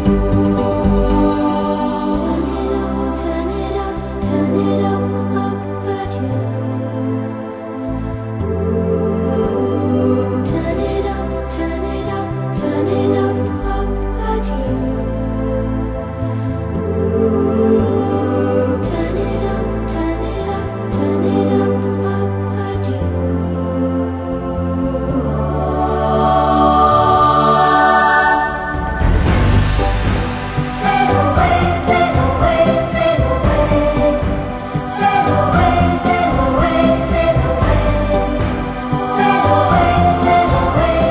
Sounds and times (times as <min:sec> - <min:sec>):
New-age music: 0:00.0 - 0:41.1.